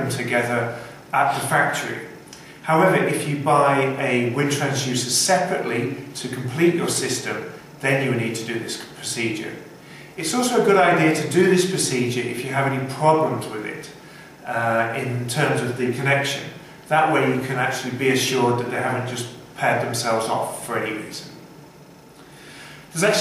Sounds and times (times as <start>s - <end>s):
Speech: 0.0s - 21.4s, 22.9s - 23.2s.